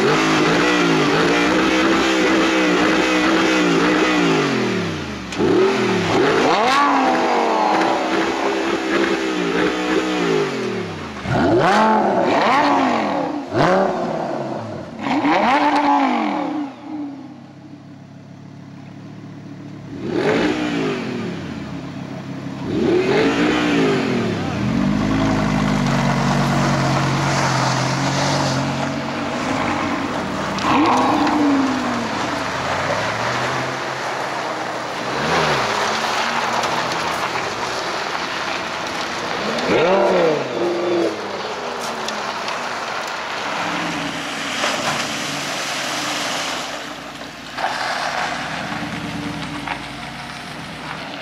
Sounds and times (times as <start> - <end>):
Field recording: 0.0 - 51.2
Race car, auto racing: 0.0 - 51.2.